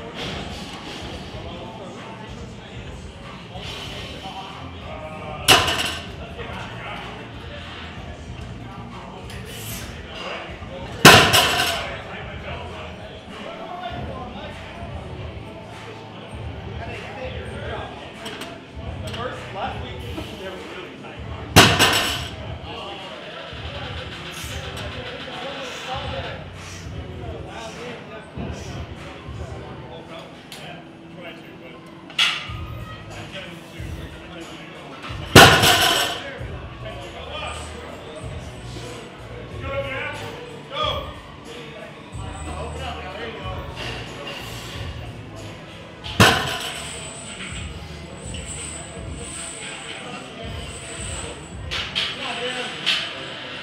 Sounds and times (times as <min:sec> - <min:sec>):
Music: 0:00.0 - 0:53.6
Speech: 0:00.0 - 0:53.6.